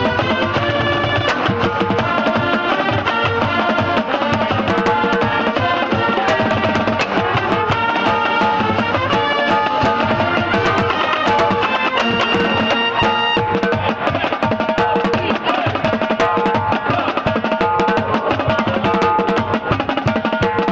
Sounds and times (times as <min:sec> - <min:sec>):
Drum kit: 0:00.0 - 0:20.7
Snare drum: 0:00.0 - 0:20.7.